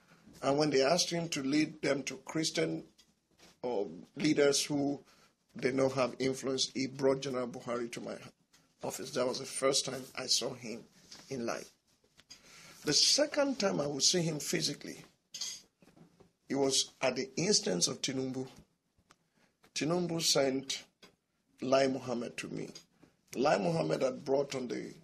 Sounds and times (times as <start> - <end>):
Inside, small room: 0.0 - 25.0
Speech: 0.4 - 2.9, 3.6 - 5.0, 5.6 - 11.7, 12.8 - 15.1, 16.5 - 18.6, 19.8 - 20.9, 21.6 - 22.8, 23.4 - 25.0.